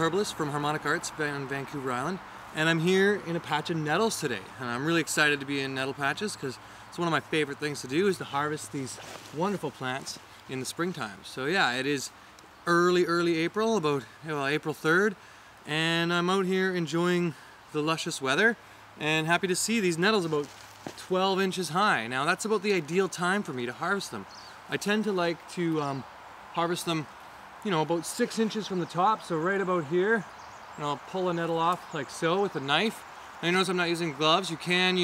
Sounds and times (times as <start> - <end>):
Speech: 0.0 - 12.1, 12.7 - 35.0.